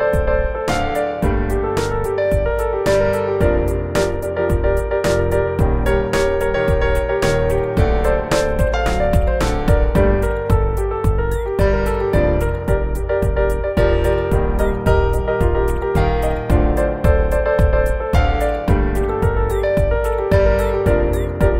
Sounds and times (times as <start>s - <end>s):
Music: 0.0s - 21.5s.